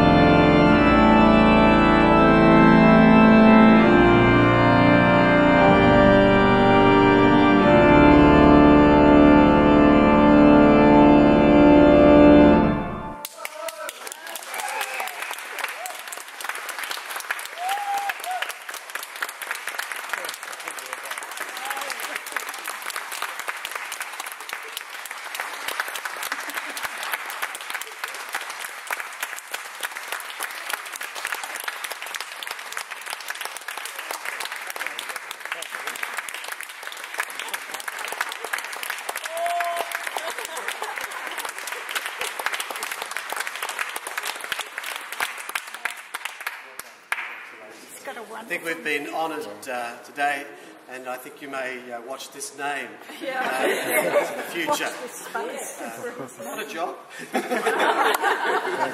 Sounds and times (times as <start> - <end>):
Speech: 47.6 - 57.0.